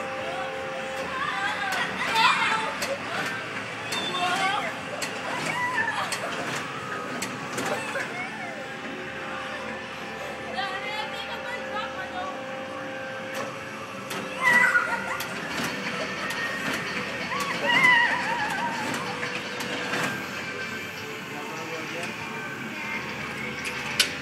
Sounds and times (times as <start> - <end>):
Music: 15.3 - 24.2.